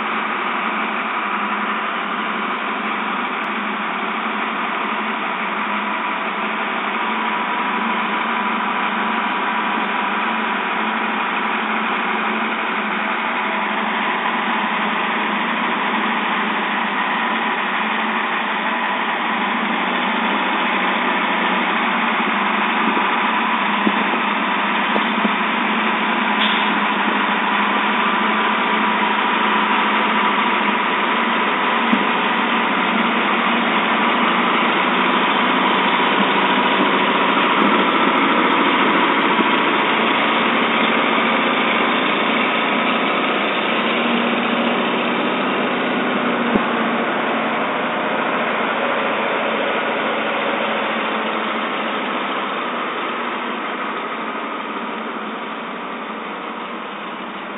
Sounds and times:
Vehicle: 0.0s - 57.5s.

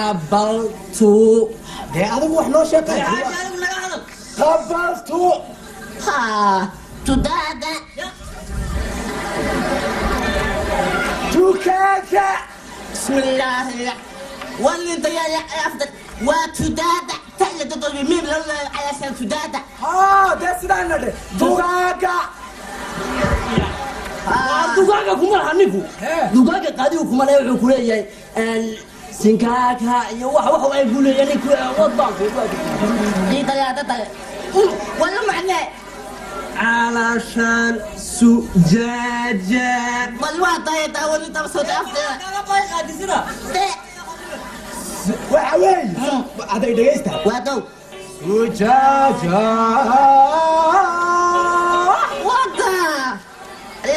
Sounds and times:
Inside, public space: 0.0s - 53.9s.

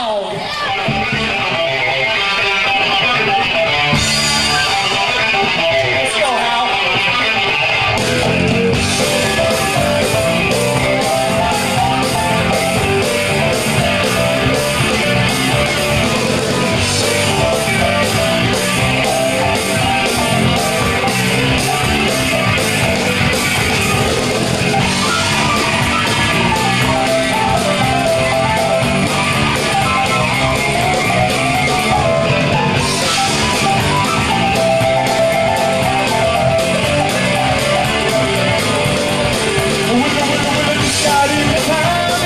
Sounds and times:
Music: 0.0s - 42.2s.

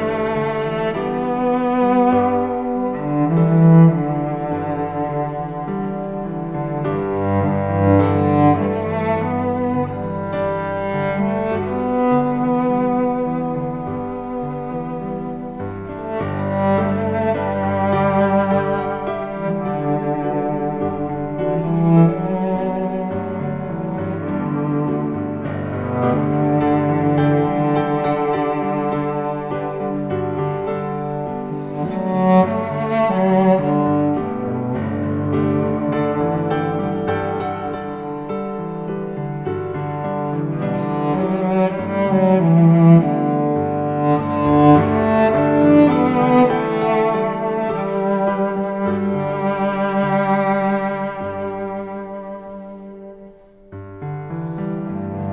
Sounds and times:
Cello: 0.0s - 55.3s.

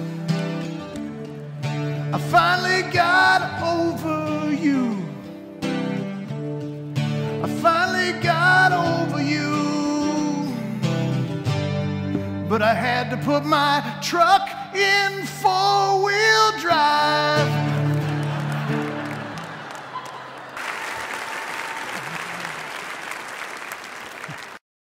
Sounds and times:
Music: 0.0s - 20.2s.

